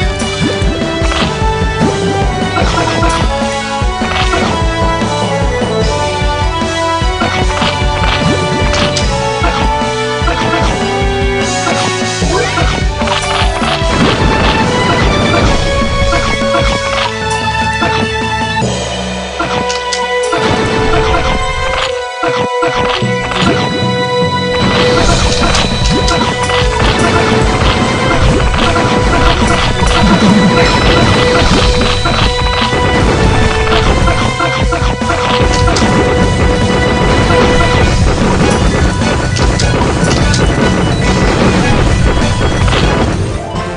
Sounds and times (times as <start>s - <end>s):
Music: 0.0s - 43.7s.